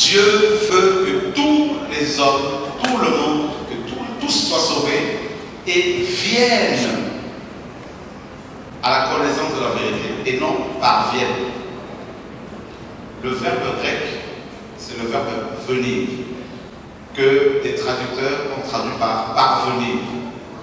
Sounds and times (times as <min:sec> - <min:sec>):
Male speech, man speaking: 0:00.0 - 0:07.2, 0:08.8 - 0:11.6, 0:13.2 - 0:16.3, 0:17.2 - 0:20.3.